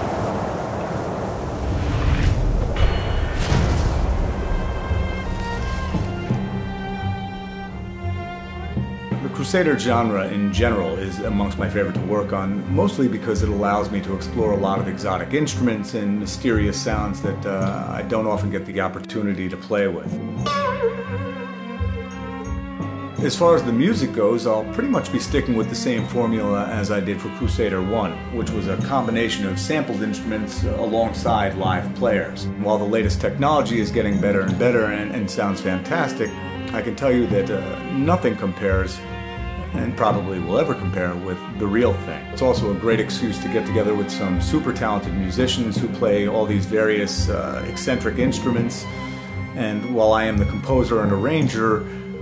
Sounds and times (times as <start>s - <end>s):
Tender music: 2.6s - 52.2s
Speech: 9.2s - 20.2s, 23.2s - 39.0s, 39.8s - 48.9s, 49.6s - 52.2s.